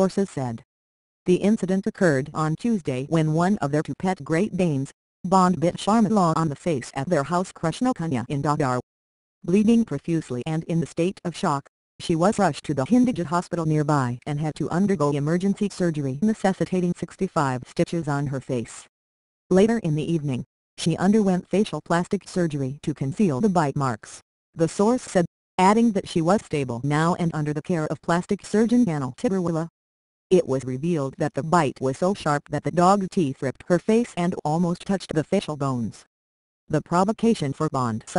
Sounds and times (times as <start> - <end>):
Speech: 0.0 - 0.6, 1.3 - 8.9, 9.5 - 18.9, 19.5 - 29.7, 30.3 - 36.1, 36.7 - 38.1.